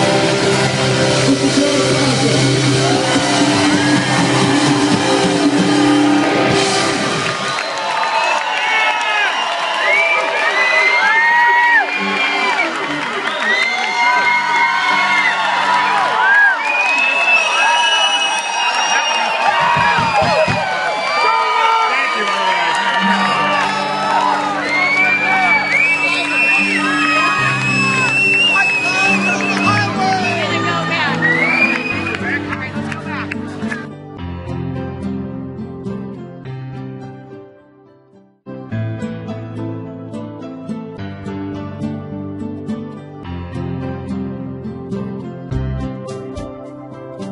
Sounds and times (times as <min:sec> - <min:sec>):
Crowd: 0:00.0 - 0:34.2.